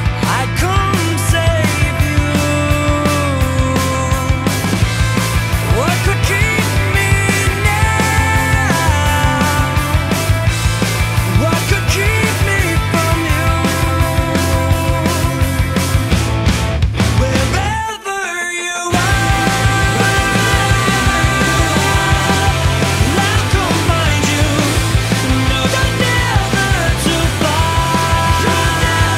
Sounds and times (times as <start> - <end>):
Music: 0.0 - 29.1.